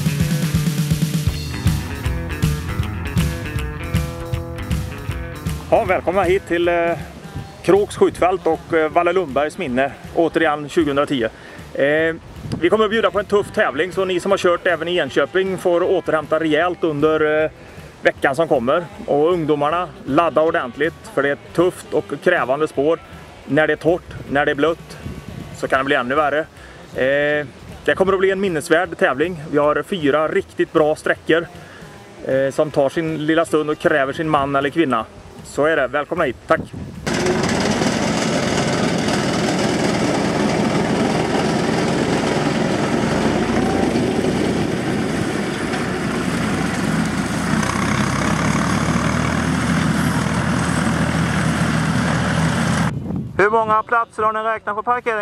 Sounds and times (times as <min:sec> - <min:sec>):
Speech: 0:05.7 - 0:17.5, 0:18.1 - 0:25.0, 0:25.6 - 0:31.5, 0:32.2 - 0:36.8, 0:53.4 - 0:55.2.